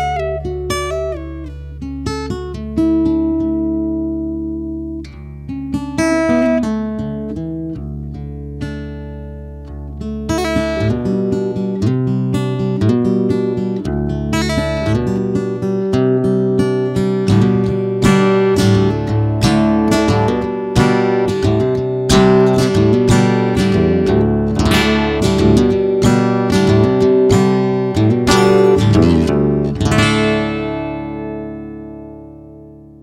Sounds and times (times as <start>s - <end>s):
Music: 0.0s - 33.0s.